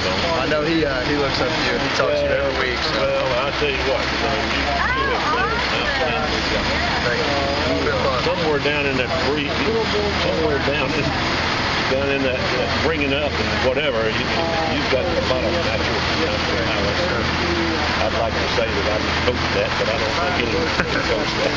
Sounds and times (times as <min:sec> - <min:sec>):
Speech: 0:00.0 - 0:21.5.